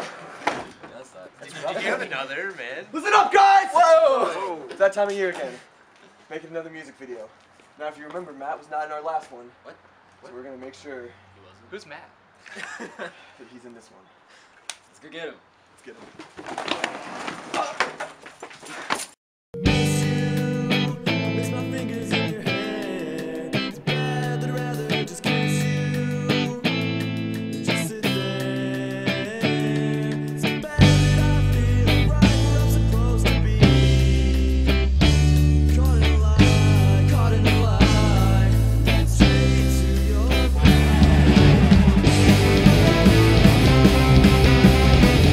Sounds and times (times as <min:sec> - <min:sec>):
Musical instrument: 0:19.6 - 0:28.5, 0:38.8 - 0:45.3.